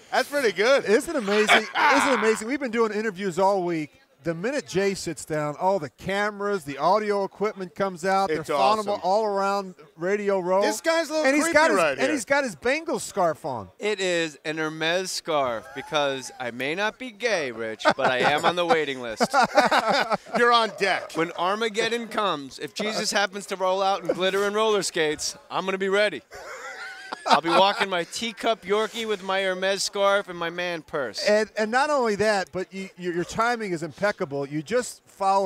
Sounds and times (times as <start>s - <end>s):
Speech: 0.1s - 19.4s, 20.3s - 26.2s, 27.3s - 35.4s.